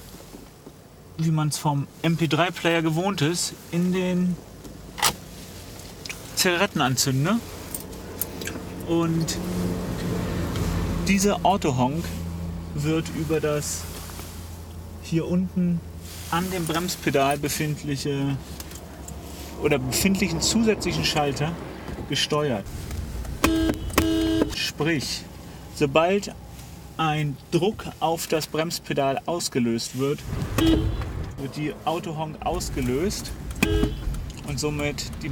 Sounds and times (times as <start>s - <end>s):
Vehicle: 0.0s - 35.3s
Speech: 1.2s - 4.4s, 6.4s - 7.5s, 8.8s - 9.4s, 11.0s - 12.2s, 12.8s - 13.9s, 15.0s - 18.4s, 19.6s - 22.7s, 24.6s - 26.4s, 27.0s - 30.3s, 31.4s - 33.4s, 34.4s - 35.3s.